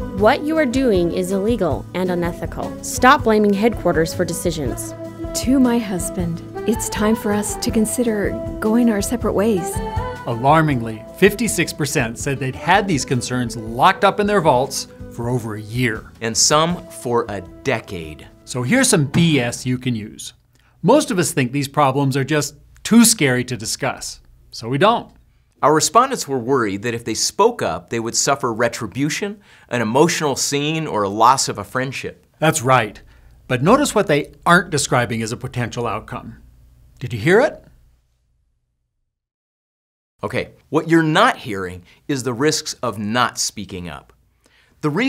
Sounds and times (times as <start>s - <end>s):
Music: 0.0s - 20.1s
Speech: 0.2s - 36.4s, 37.0s - 37.7s, 40.2s - 44.1s, 44.8s - 45.0s.